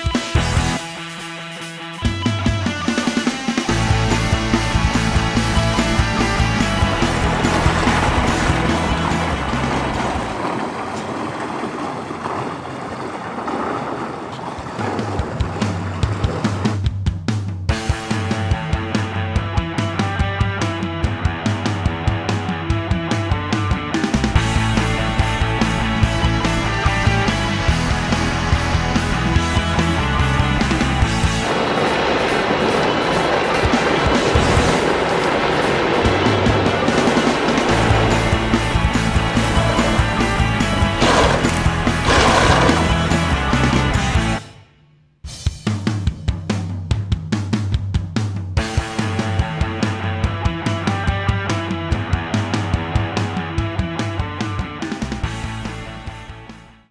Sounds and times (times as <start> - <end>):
Music: 0.0 - 10.4, 15.4 - 56.9
Motorboat, speedboat: 3.7 - 17.0, 24.3 - 43.8.